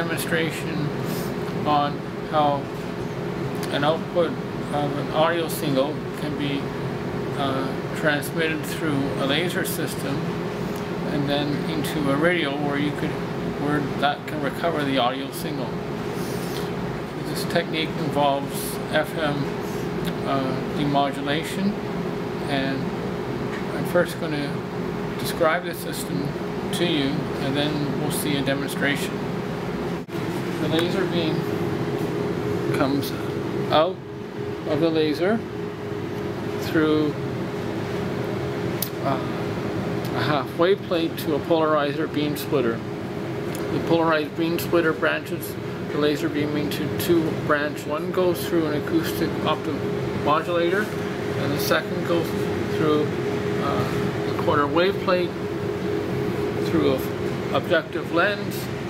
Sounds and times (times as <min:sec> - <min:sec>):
Speech: 0:00.0 - 0:01.0, 0:01.6 - 0:02.8, 0:03.6 - 0:06.7, 0:07.4 - 0:10.3, 0:11.1 - 0:15.8, 0:17.2 - 0:21.8, 0:22.4 - 0:23.0, 0:23.6 - 0:24.6, 0:25.2 - 0:29.2, 0:30.6 - 0:31.5, 0:32.7 - 0:35.5, 0:36.6 - 0:37.2, 0:38.8 - 0:39.5, 0:40.1 - 0:42.9, 0:43.6 - 0:55.4, 0:56.6 - 0:58.8.